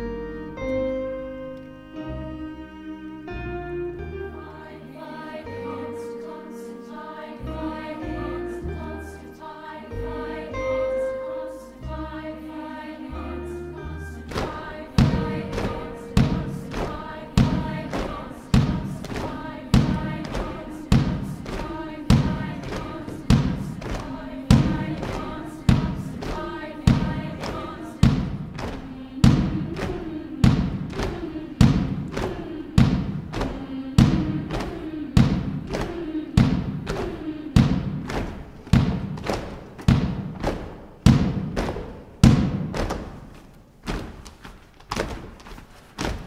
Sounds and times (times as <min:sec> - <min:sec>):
Choir: 0:00.0 - 0:43.2
Thump, thud: 0:14.3 - 0:16.6, 0:17.4 - 0:21.3, 0:28.0 - 0:29.6, 0:30.4 - 0:43.2.